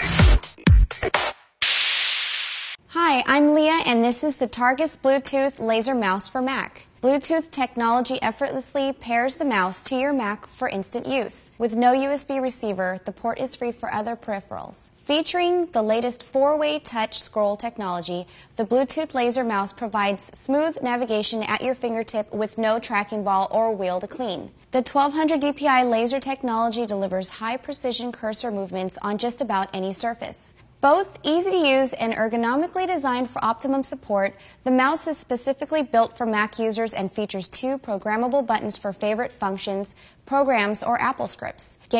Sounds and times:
Speech: 2.9s - 41.9s.

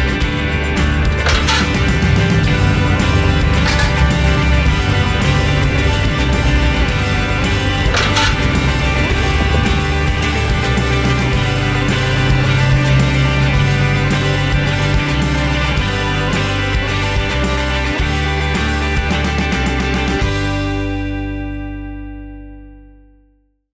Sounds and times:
Music: 0.0s - 23.6s.

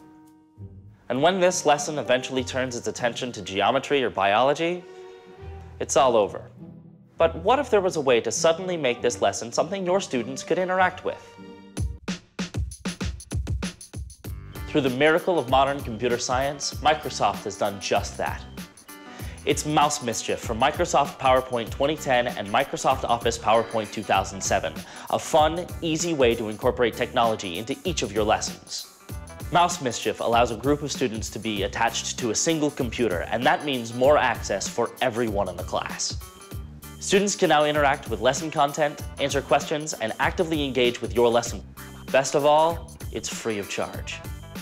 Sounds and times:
Music: 0.0s - 44.6s
Speech: 1.1s - 4.8s, 5.8s - 6.5s, 7.2s - 11.3s, 14.7s - 18.5s, 19.5s - 28.9s, 29.5s - 36.2s, 37.0s - 44.2s.

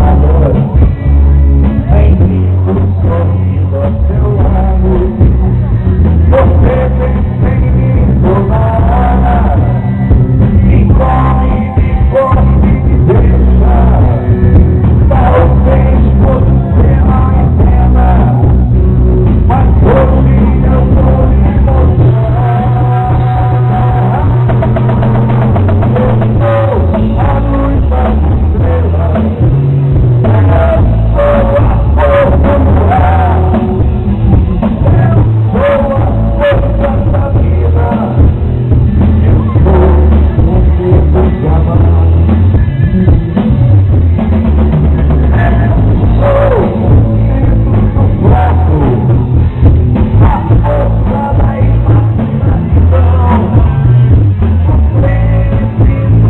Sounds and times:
Rock and roll: 0.0s - 56.2s.

